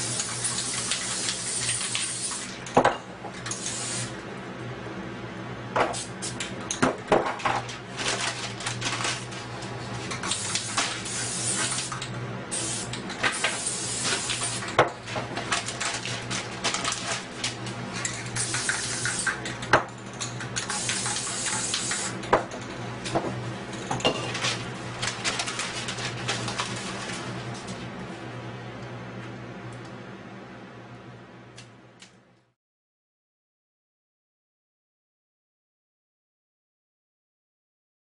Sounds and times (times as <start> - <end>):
Spray: 0.0 - 2.5, 3.5 - 4.1, 10.3 - 14.7, 18.4 - 19.3, 20.7 - 22.2.